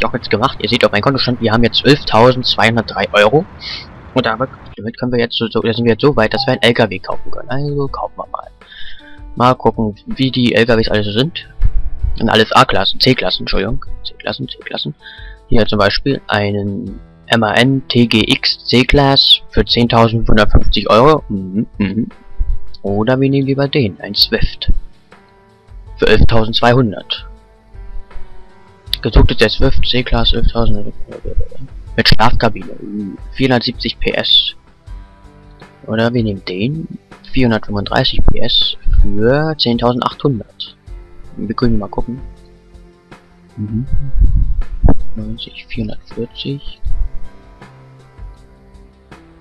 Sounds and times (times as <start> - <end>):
Speech: 0.0 - 11.5, 12.2 - 22.2, 22.8 - 24.8, 26.0 - 27.2, 29.0 - 34.6, 35.9 - 40.8, 41.4 - 42.2, 43.6 - 44.2, 45.2 - 46.8
Music: 0.0 - 49.4.